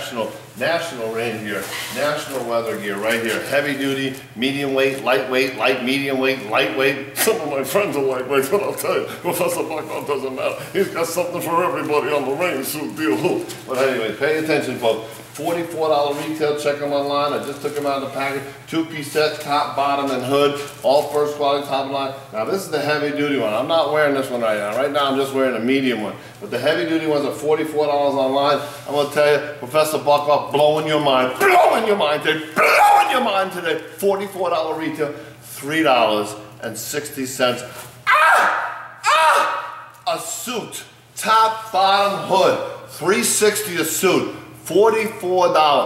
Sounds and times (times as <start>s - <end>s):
Speech: 0.0s - 37.8s, 39.1s - 45.8s.